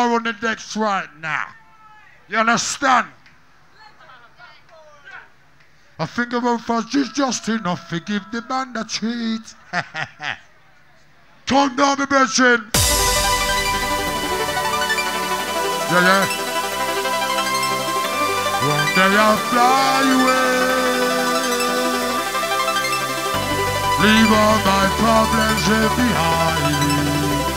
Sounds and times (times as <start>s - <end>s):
Music: 12.8s - 27.5s.